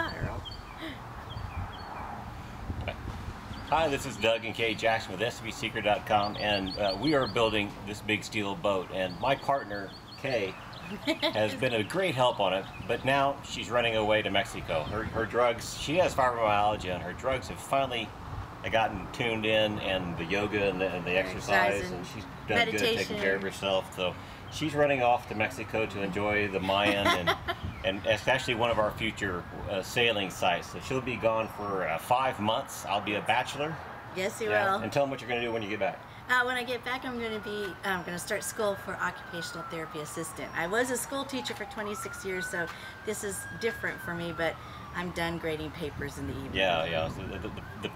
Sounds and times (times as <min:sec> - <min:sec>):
Speech: 0:11.3 - 0:16.2, 0:18.7 - 0:24.0, 0:34.4 - 0:36.0.